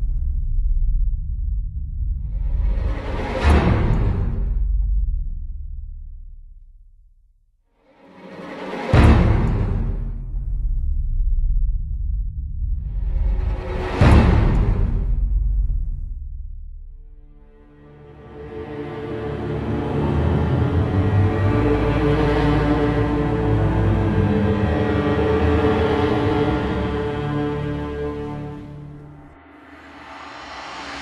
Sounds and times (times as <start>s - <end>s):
Soundtrack music: 7.9s - 10.8s, 17.2s - 31.0s.